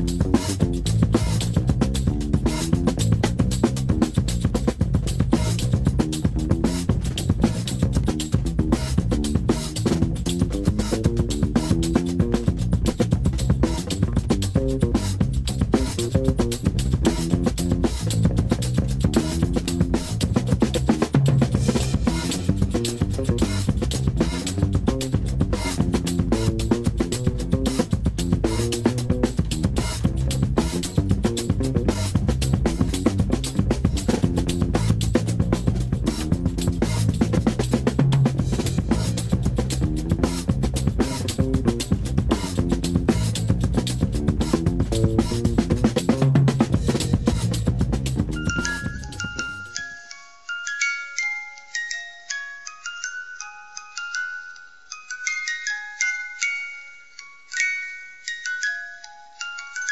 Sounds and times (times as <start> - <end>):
Music: 0.0 - 59.9.